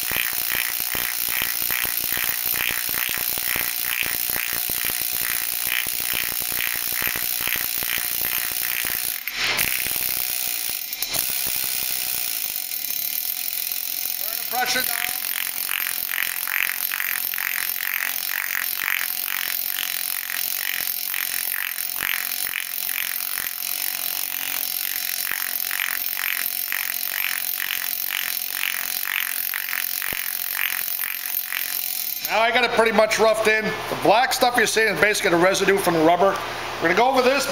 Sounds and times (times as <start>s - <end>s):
Speech: 14.2s - 15.2s, 32.3s - 37.5s.